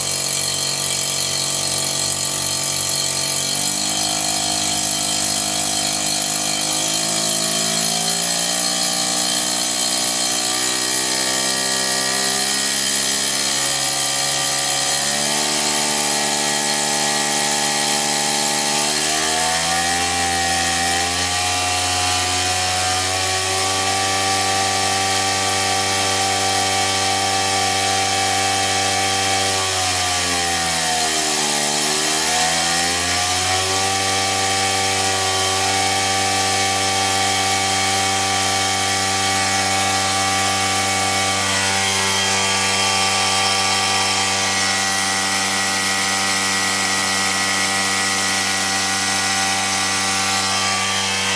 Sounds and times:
Drill: 0:00.0 - 0:51.3
Engine: 0:00.0 - 0:51.3.

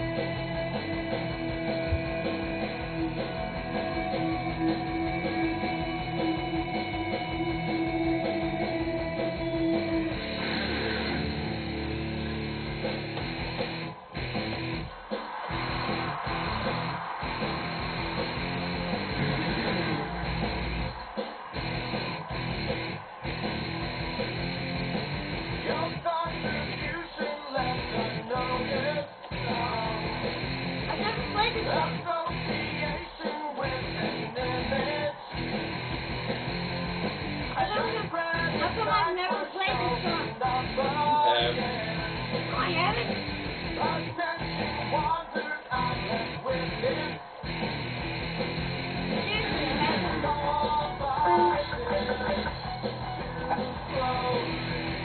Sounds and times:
Bass guitar: 0:00.0 - 0:27.0, 0:27.6 - 0:33.0, 0:33.6 - 0:39.1, 0:39.7 - 0:45.2, 0:45.8 - 0:55.0.

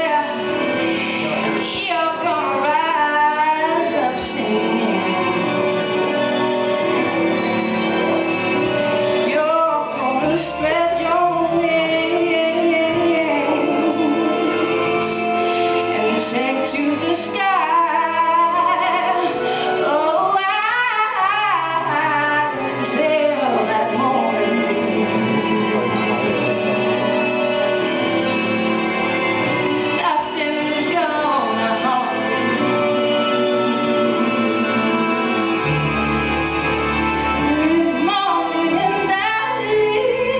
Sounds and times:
Music: 0:00.0 - 0:40.3
Female singing: 0:01.2 - 0:05.4, 0:09.3 - 0:14.6, 0:16.0 - 0:26.3, 0:30.0 - 0:32.3, 0:37.4 - 0:40.3.

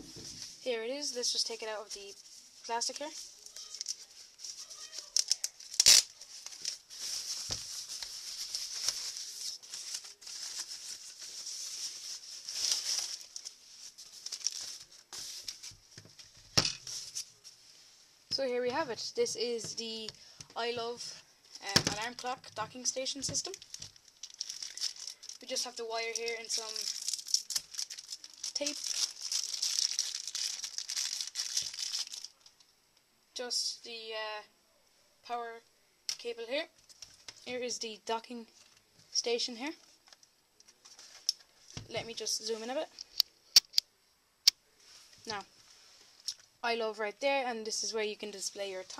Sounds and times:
Speech: 0:00.6 - 0:03.8, 0:18.3 - 0:23.6, 0:25.4 - 0:26.9, 0:28.6 - 0:28.8, 0:33.4 - 0:34.5, 0:35.2 - 0:36.7, 0:37.5 - 0:38.5, 0:39.2 - 0:39.8, 0:41.9 - 0:42.9, 0:45.3 - 0:45.5, 0:46.6 - 0:48.9.

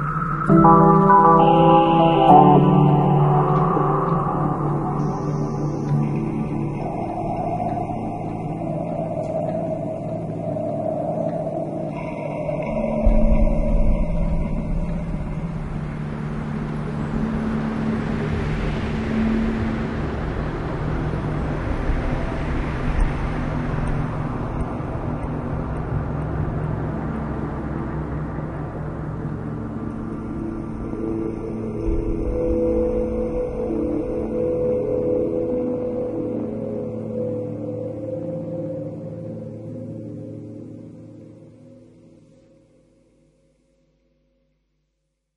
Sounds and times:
Soundtrack music: 0:00.0 - 0:42.1.

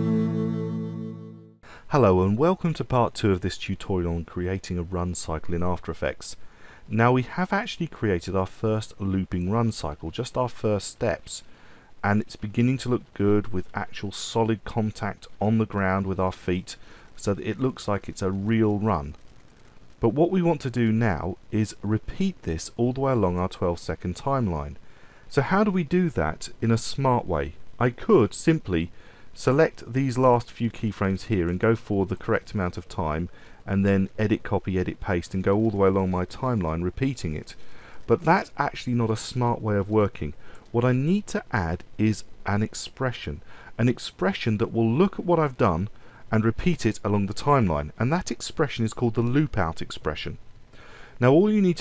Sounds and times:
Speech: 0:01.9 - 0:19.2, 0:20.0 - 0:50.4, 0:51.2 - 0:51.8.

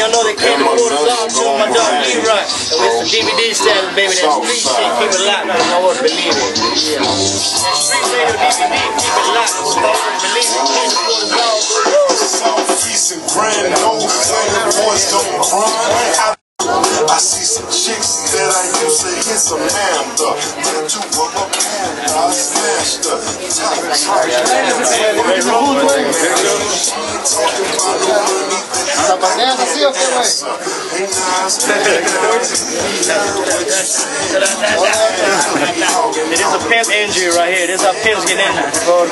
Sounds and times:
Music: 0:00.0 - 0:39.1
Speech: 0:00.0 - 0:39.1.

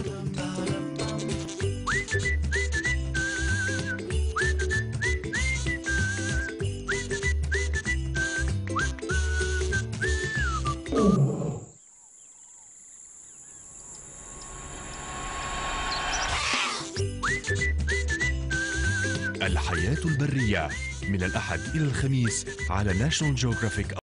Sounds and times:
Music: 0:00.0 - 0:11.0, 0:16.9 - 0:24.0
Speech: 0:19.4 - 0:24.0.

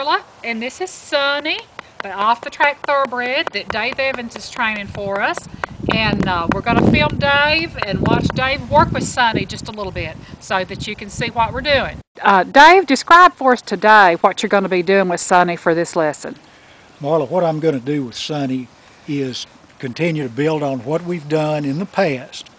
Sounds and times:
Speech: 0:06.0 - 0:16.4, 0:17.0 - 0:22.5.

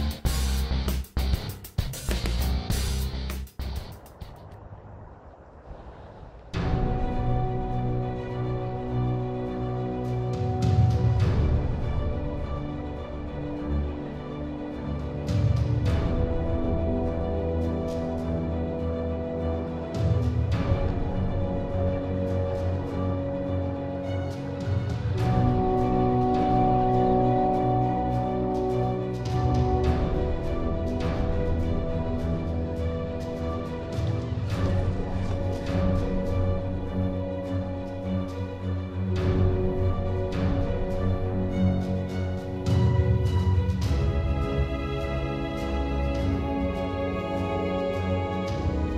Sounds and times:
Music: 0:00.0 - 0:04.5, 0:06.6 - 0:48.9.

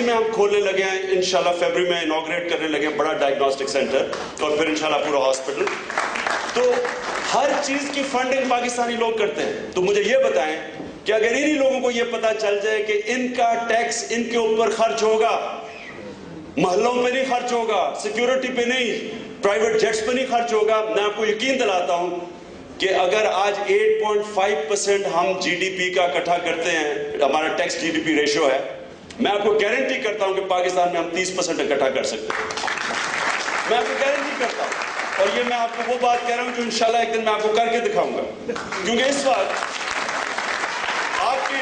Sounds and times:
Male speech, man speaking: 0:00.0 - 0:05.8, 0:06.6 - 0:15.7, 0:16.6 - 0:32.4, 0:33.7 - 0:39.6, 0:41.2 - 0:41.6
Narration, monologue: 0:00.0 - 0:41.6.

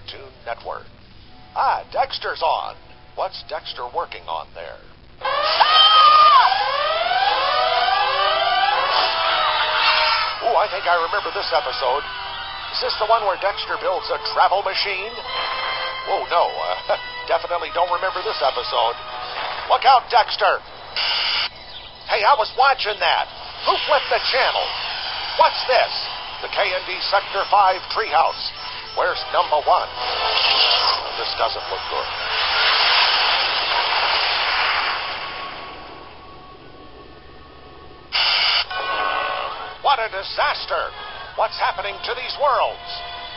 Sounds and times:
Speech: 0:00.0 - 0:00.9, 0:01.6 - 0:04.9, 0:10.4 - 0:12.0, 0:12.7 - 0:15.1, 0:16.1 - 0:19.0, 0:19.7 - 0:20.6, 0:22.1 - 0:24.7, 0:25.4 - 0:29.9, 0:31.0 - 0:32.1, 0:39.8 - 0:43.0
Music: 0:00.0 - 0:43.3.

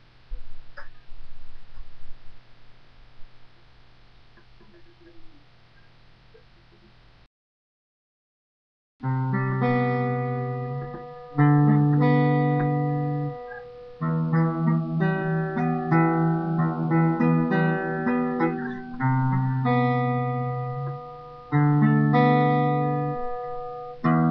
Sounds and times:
Music: 0:09.0 - 0:24.3.

